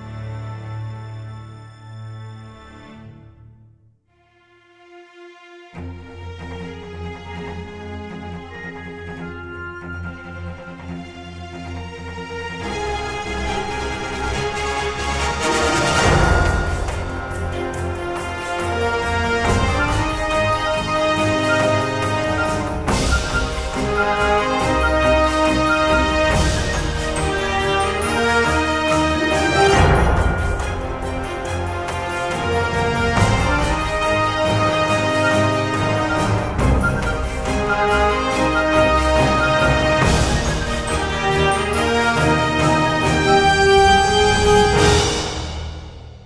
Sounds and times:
Music: 0:00.0 - 0:46.2.

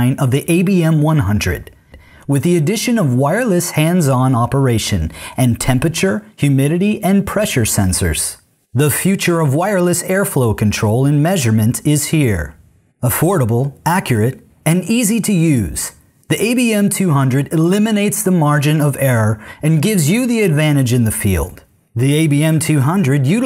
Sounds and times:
Speech: 0:00.0 - 0:23.4.

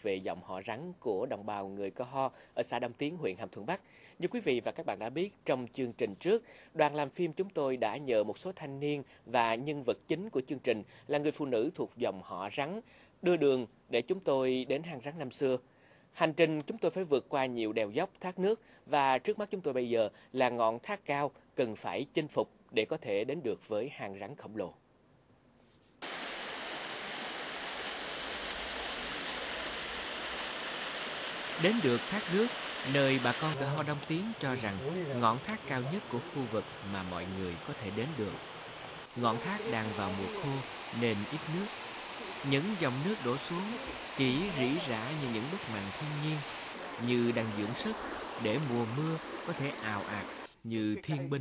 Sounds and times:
Speech: 0:00.0 - 0:15.6, 0:16.2 - 0:24.8, 0:31.6 - 0:38.4, 0:39.2 - 0:41.7, 0:42.4 - 0:46.4, 0:47.0 - 0:51.4.

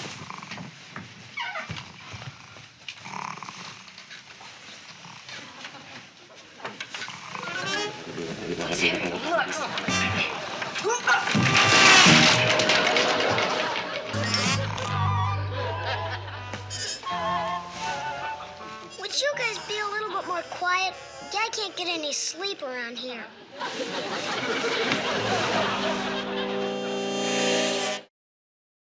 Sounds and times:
Music: 0:07.6 - 0:10.5, 0:11.2 - 0:21.5, 0:25.1 - 0:28.1.

